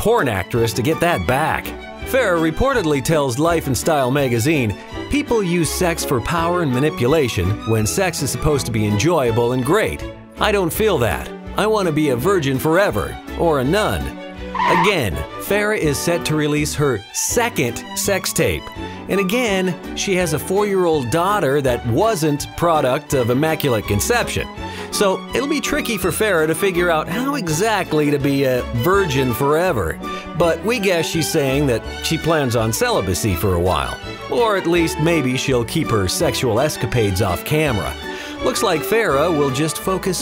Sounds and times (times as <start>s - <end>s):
Music: 0.0s - 40.2s
Speech: 0.0s - 40.2s.